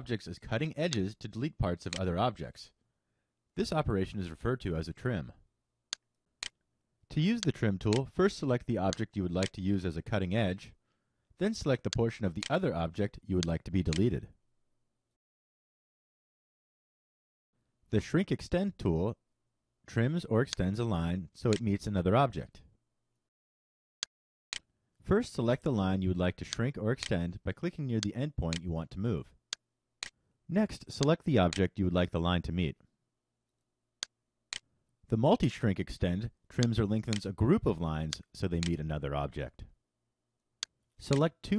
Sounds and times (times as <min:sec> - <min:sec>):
Speech: 0:00.0 - 0:02.8, 0:03.6 - 0:05.4, 0:07.1 - 0:10.8, 0:11.4 - 0:14.4, 0:17.9 - 0:19.2, 0:19.9 - 0:22.7, 0:25.0 - 0:29.4, 0:30.5 - 0:32.8, 0:35.1 - 0:39.7, 0:41.0 - 0:41.5.